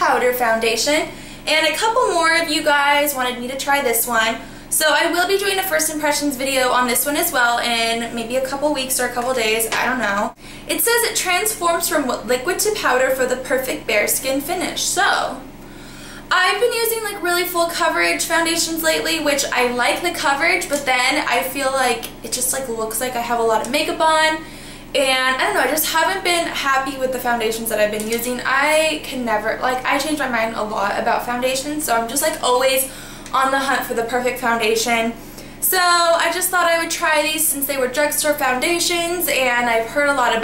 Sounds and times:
Speech: 0.0s - 15.4s, 16.3s - 24.4s, 25.0s - 40.4s.

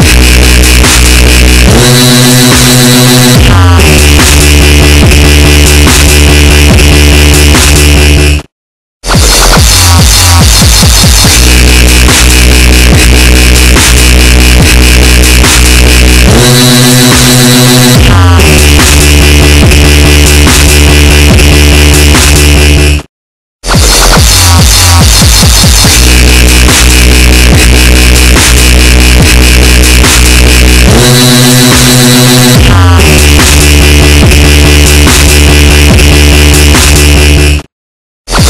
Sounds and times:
Dubstep: 0.0s - 37.6s, 38.3s - 38.4s.

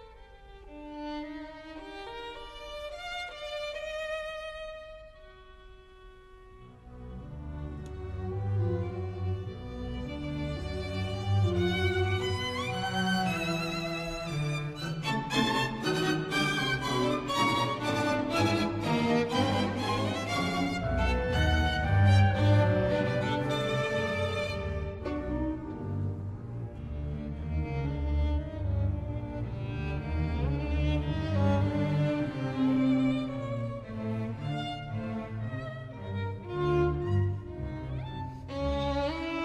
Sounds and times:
Violin, fiddle: 0.0s - 39.4s.

